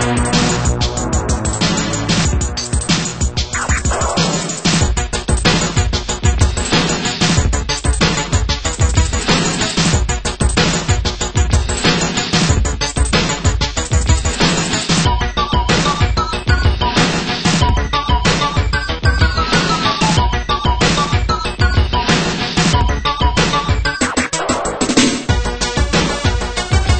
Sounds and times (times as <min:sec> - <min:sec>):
Background music: 0:00.0 - 0:27.0
Exciting music: 0:00.0 - 0:27.0
Soundtrack music: 0:00.0 - 0:27.0.